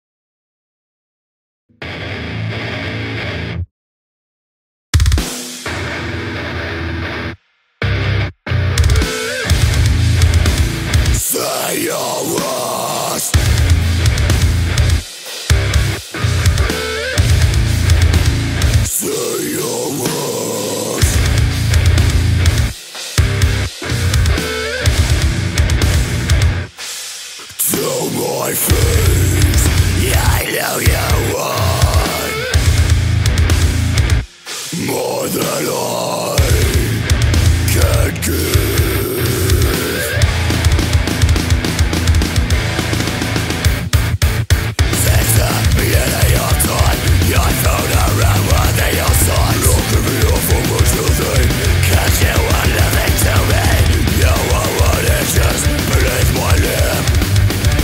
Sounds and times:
Music: 1.7 - 3.7, 5.0 - 57.8.

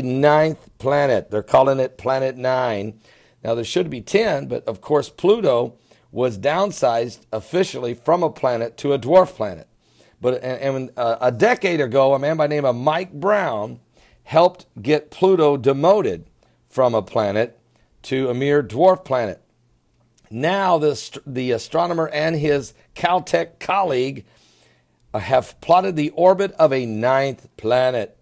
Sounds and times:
Speech: 0.0 - 19.4, 20.3 - 24.3, 25.2 - 28.2.

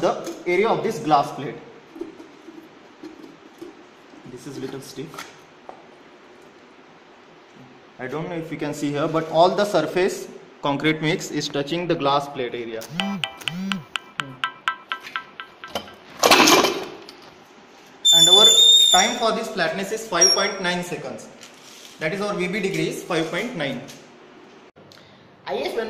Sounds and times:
Speech: 0.0 - 1.7, 4.2 - 5.3, 8.0 - 12.8, 18.2 - 21.4, 22.0 - 24.0, 25.4 - 25.8
Inside, large room or hall: 18.0 - 19.4.

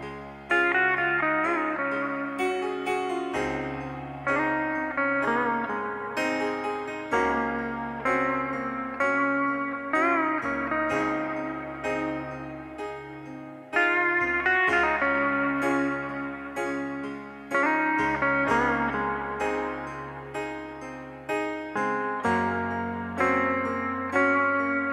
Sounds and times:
Music: 0.0 - 24.9.

